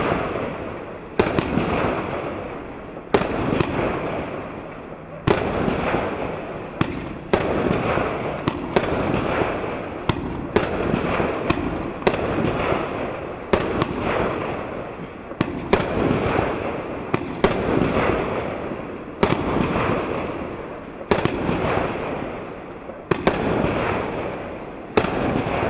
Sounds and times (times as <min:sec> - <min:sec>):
Fireworks: 0:00.0 - 0:25.6.